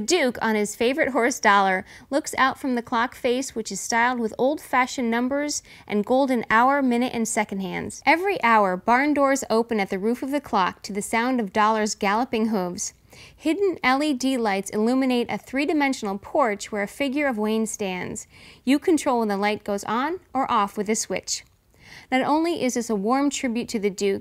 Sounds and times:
Speech: 0:00.0 - 0:21.5, 0:22.1 - 0:24.2.

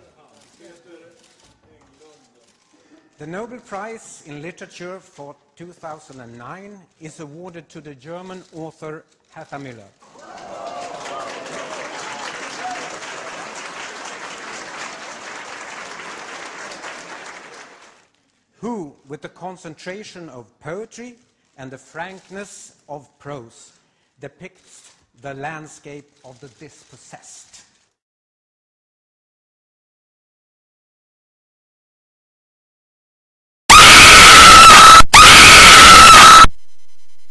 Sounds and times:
Male speech, man speaking: 0:00.0 - 0:02.4, 0:03.2 - 0:09.9, 0:18.6 - 0:24.6, 0:25.2 - 0:27.5
Narration, monologue: 0:00.0 - 0:10.0, 0:18.1 - 0:27.8.

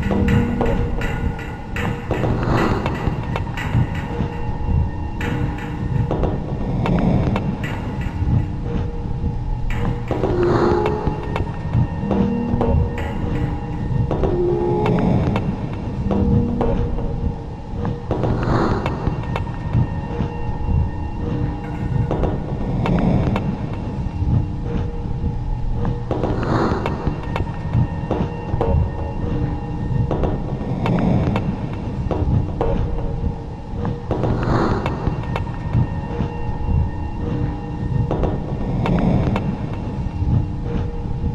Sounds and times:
Music: 0:00.0 - 0:41.3.

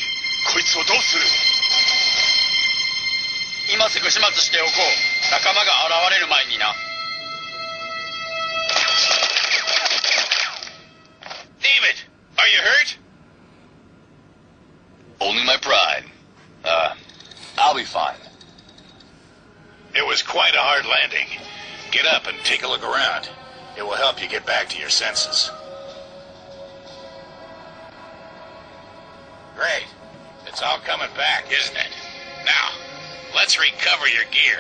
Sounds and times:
Speech: 0:11.6 - 0:13.0, 0:15.2 - 0:17.0, 0:20.0 - 0:25.5, 0:29.6 - 0:31.9, 0:33.4 - 0:34.6.

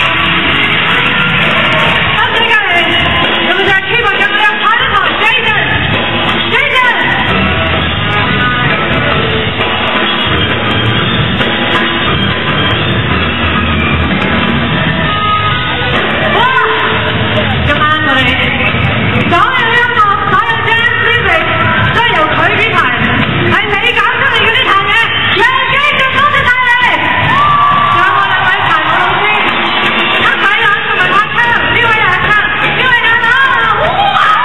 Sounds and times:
Speech: 0:16.3 - 0:27.1.

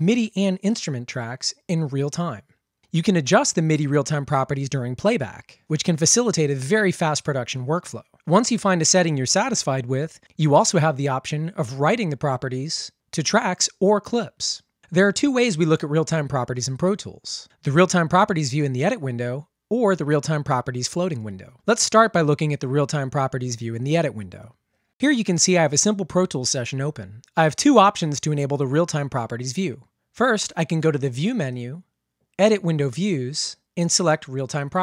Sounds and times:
Speech: 0:00.0 - 0:34.8.

